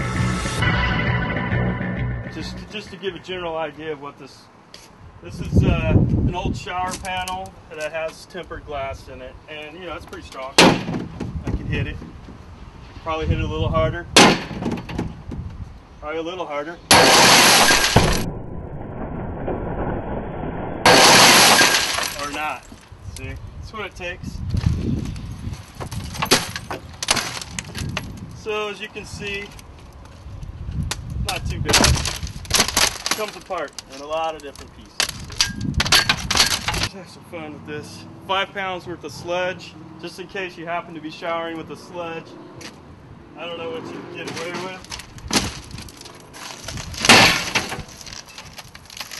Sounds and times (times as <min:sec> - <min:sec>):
Speech: 0:02.3 - 0:04.5, 0:05.2 - 0:10.6, 0:11.4 - 0:12.0, 0:13.0 - 0:14.1, 0:16.0 - 0:16.8, 0:22.2 - 0:24.4, 0:28.4 - 0:29.6, 0:31.2 - 0:31.8, 0:33.2 - 0:35.0, 0:36.9 - 0:42.4, 0:43.4 - 0:44.9
Breaking: 0:16.9 - 0:18.4, 0:20.8 - 0:22.7, 0:25.9 - 0:28.0, 0:31.7 - 0:36.9, 0:44.6 - 0:49.2.